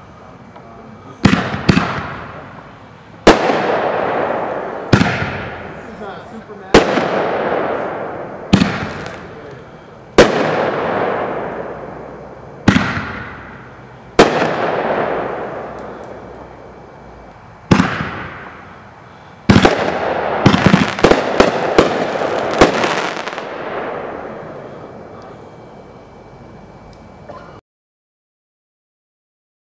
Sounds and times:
Fireworks: 0.5 - 16.8, 17.7 - 25.7.

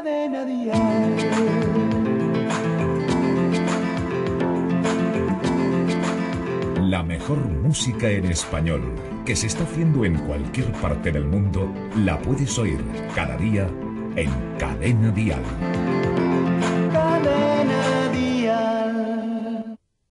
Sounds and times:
Music: 0.0 - 19.8
Speech: 6.8 - 15.6.

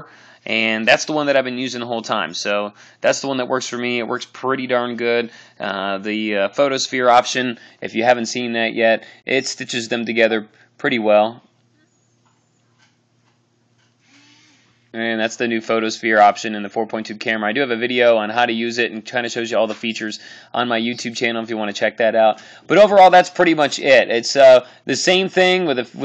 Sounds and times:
Speech: 0.0 - 11.5, 15.0 - 26.0
Inside, small room: 0.0 - 26.0.

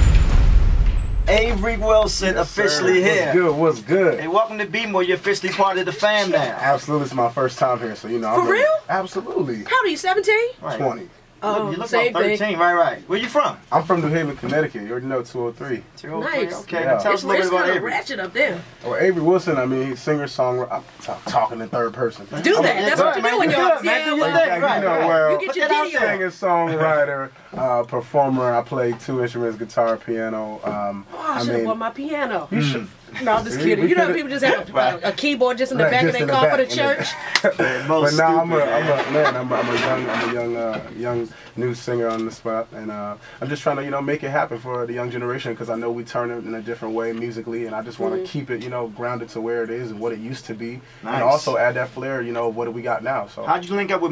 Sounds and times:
Speech: 1.3 - 9.6, 10.6 - 54.1.

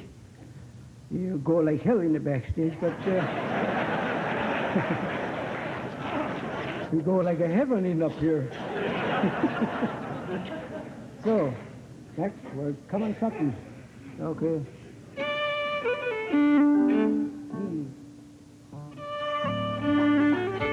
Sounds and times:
Speech: 1.1 - 3.3, 6.1 - 8.6, 11.2 - 14.8, 17.6 - 18.0
Violin, fiddle: 15.2 - 17.4, 19.0 - 20.7.

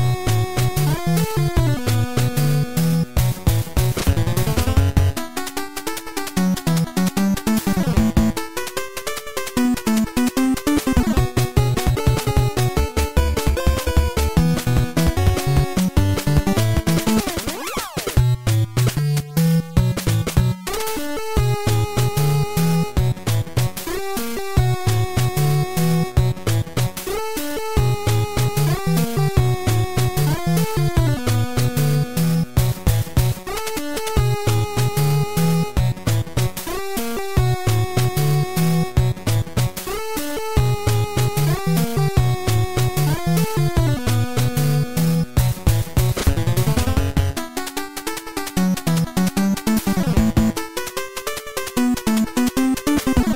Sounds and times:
Rhythm and blues: 0.0 - 53.3.

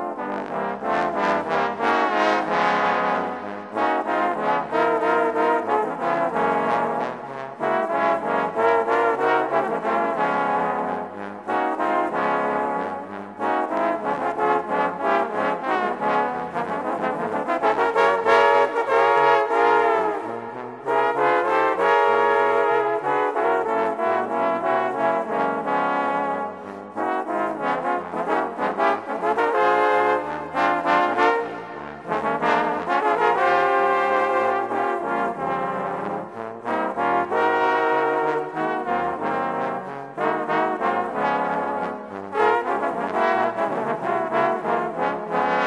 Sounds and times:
Trombone: 0.0 - 45.6.

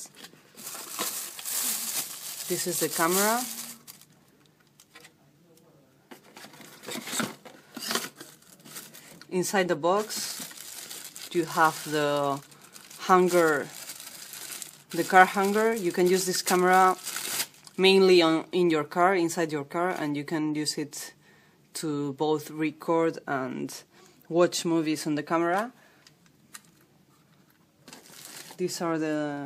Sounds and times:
Speech: 2.5 - 3.6, 4.9 - 6.1, 9.3 - 10.4, 11.3 - 12.4, 13.0 - 13.8, 15.0 - 17.0, 17.8 - 21.2, 21.8 - 25.8, 28.6 - 29.4.

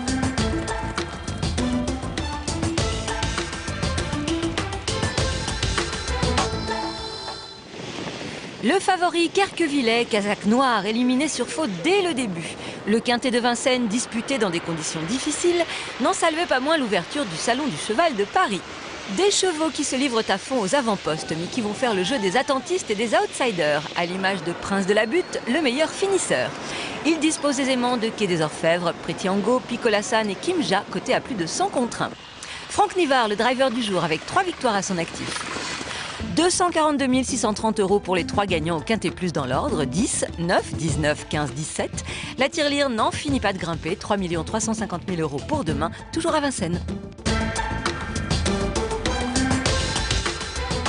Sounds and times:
Speech: 8.6 - 35.4, 36.2 - 46.9
Clip-clop: 33.4 - 36.2.

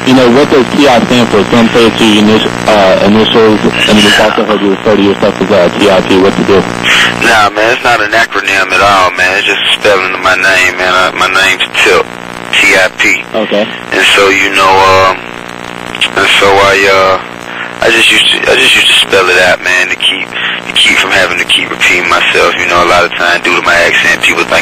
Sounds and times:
Speech: 0.0 - 15.3, 15.9 - 24.6
Radio: 0.0 - 24.6.

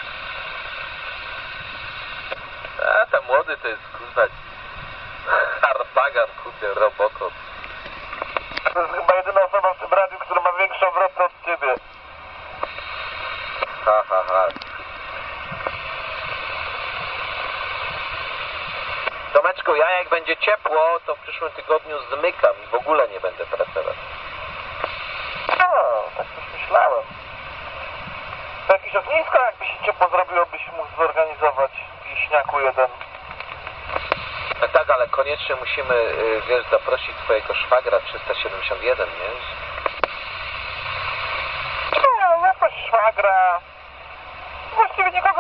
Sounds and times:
Radio: 2.0 - 4.4, 5.2 - 7.4, 8.1 - 28.0, 28.6 - 43.8, 44.6 - 45.4
Speech: 2.8 - 4.3, 5.3 - 7.3, 8.7 - 11.8, 13.9 - 14.6, 19.4 - 24.0, 25.6 - 27.1, 28.7 - 33.0, 34.6 - 39.6, 44.8 - 45.4.

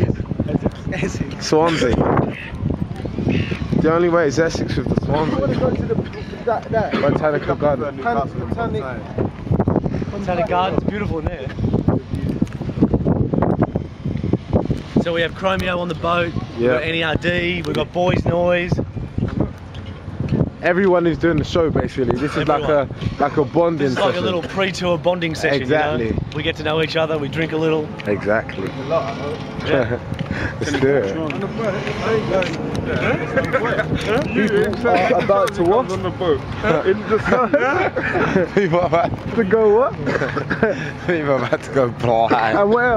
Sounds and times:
Outside, urban or manmade: 0.0 - 42.9.

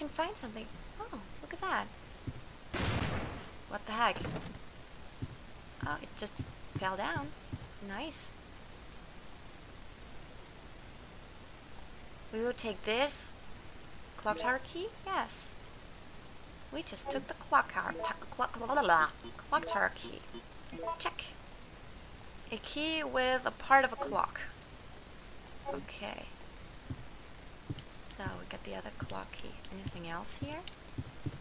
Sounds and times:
Speech: 0.0 - 1.9, 3.7 - 4.4, 5.8 - 8.3, 12.4 - 13.4, 14.2 - 15.6, 16.7 - 21.4, 22.5 - 24.6, 25.7 - 26.4, 28.1 - 30.7.

